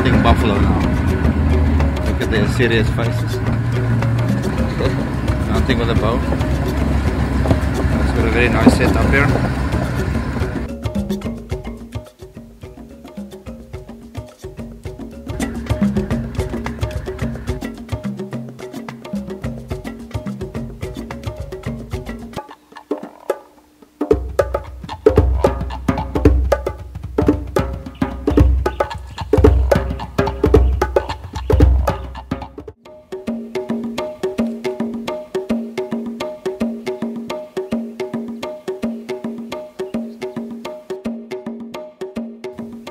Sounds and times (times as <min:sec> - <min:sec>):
Music: 0:00.0 - 0:42.9.